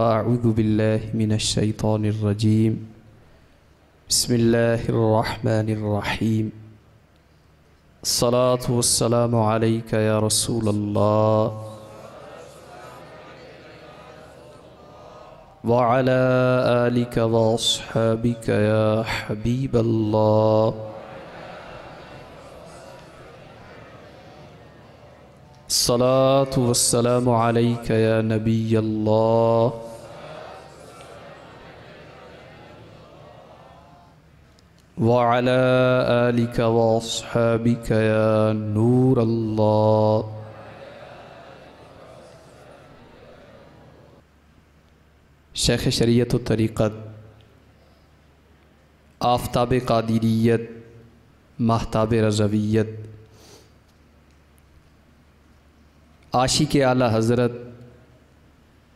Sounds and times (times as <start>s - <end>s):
Male speech, man speaking: 0.0s - 2.9s, 4.1s - 6.6s, 8.0s - 11.9s, 15.6s - 20.9s, 25.7s - 30.0s, 35.0s - 40.4s, 45.6s - 47.2s, 49.2s - 50.8s, 51.6s - 53.0s, 56.3s - 57.8s
Narration, monologue: 0.0s - 12.1s, 15.2s - 21.0s, 25.5s - 30.2s, 34.6s - 40.5s, 45.2s - 48.1s, 48.8s - 53.7s, 54.5s - 58.2s.